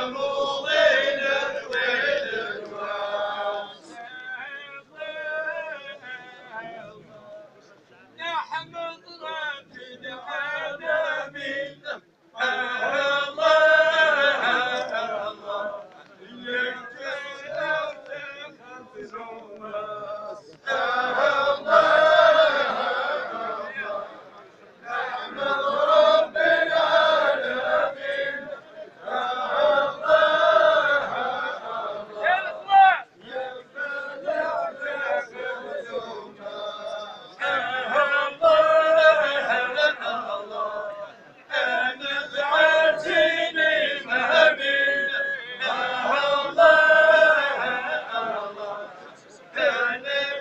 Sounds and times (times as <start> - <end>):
Mantra: 0.0 - 50.4
Speech: 6.1 - 10.6, 32.2 - 33.1.